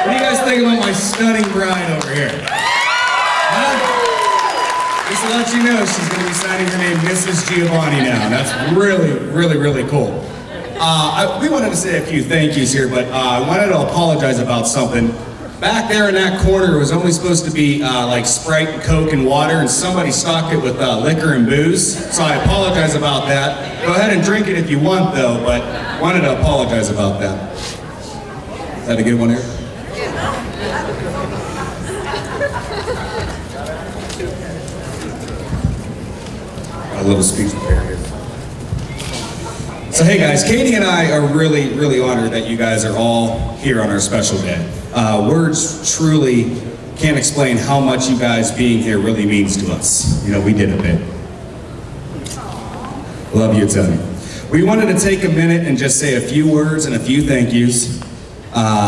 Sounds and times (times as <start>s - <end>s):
Male speech, man speaking: 0.0s - 2.4s, 5.1s - 10.2s, 10.8s - 27.5s, 28.9s - 29.6s, 36.9s - 38.1s, 39.9s - 51.2s, 53.3s - 58.8s.